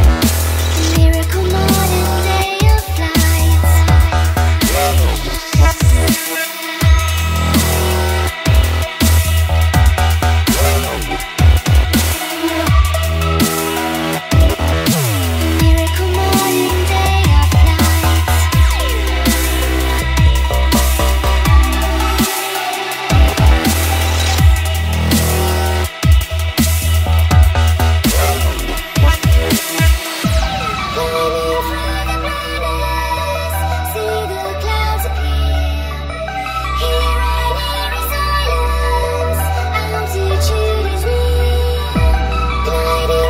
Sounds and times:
Electronic dance music: 0.0 - 35.4
Dubstep: 0.0 - 43.3.

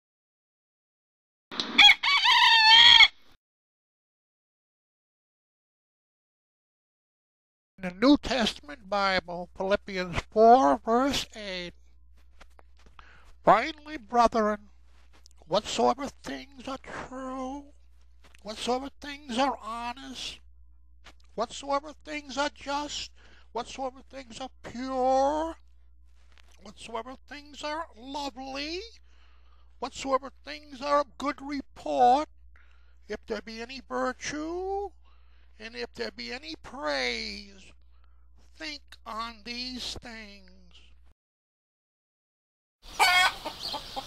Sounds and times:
Speech: 7.8 - 11.8, 13.4 - 14.7, 15.5 - 17.7, 18.4 - 20.4, 21.4 - 25.6, 26.6 - 29.0, 29.8 - 32.3, 33.1 - 35.0, 35.6 - 37.8, 38.5 - 41.0.

